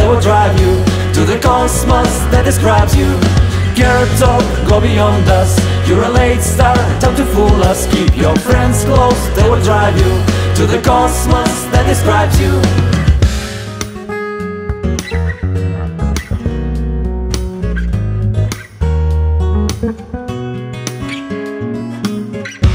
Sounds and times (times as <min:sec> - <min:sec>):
Independent music: 0:00.0 - 0:22.7.